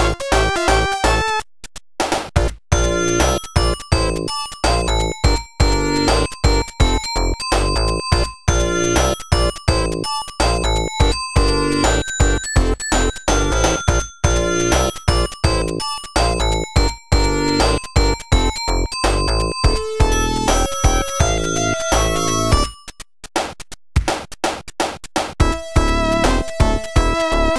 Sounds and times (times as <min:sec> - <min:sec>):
Music: 0:00.0 - 0:27.5.